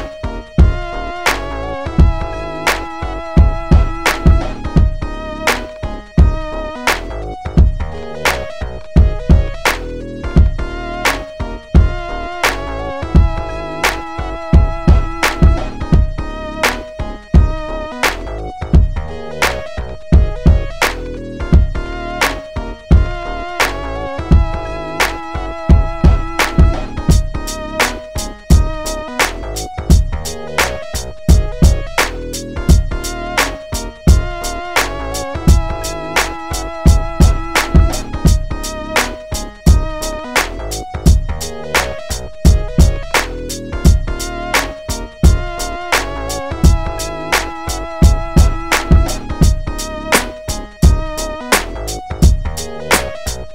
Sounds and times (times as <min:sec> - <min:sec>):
Music: 0:00.0 - 0:53.5.